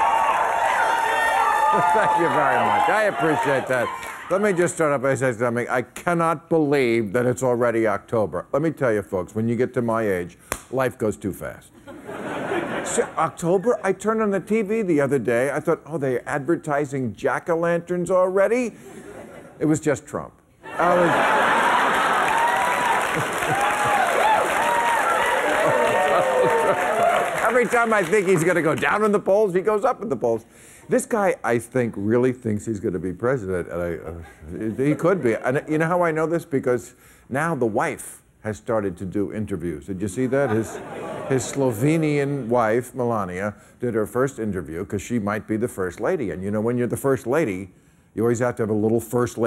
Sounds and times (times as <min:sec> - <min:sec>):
Narration, monologue: 0:01.9 - 0:21.5, 0:27.2 - 0:49.4.